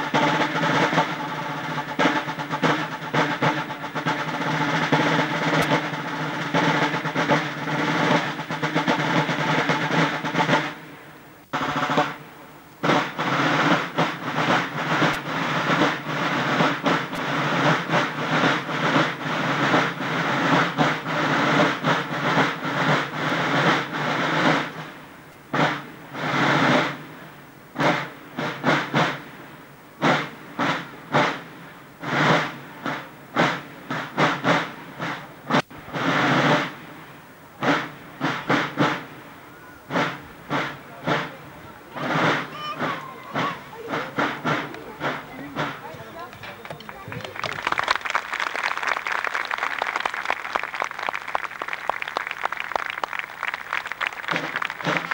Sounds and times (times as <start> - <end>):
Drum: 0.0 - 55.1.